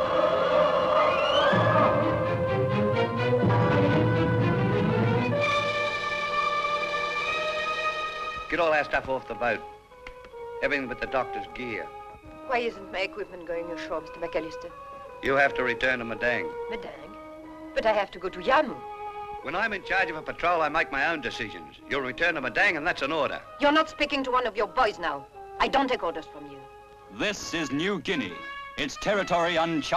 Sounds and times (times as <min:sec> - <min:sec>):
Music: 0:00.0 - 0:29.9.